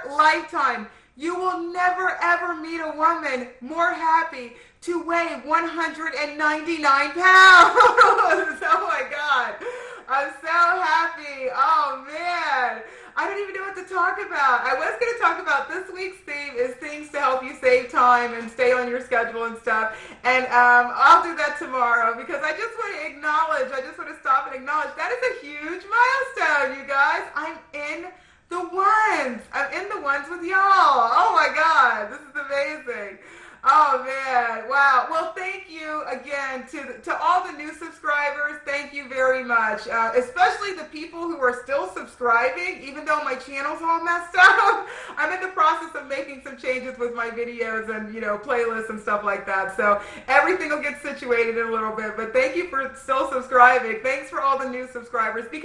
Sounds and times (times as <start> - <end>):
Speech: 0.0 - 55.6.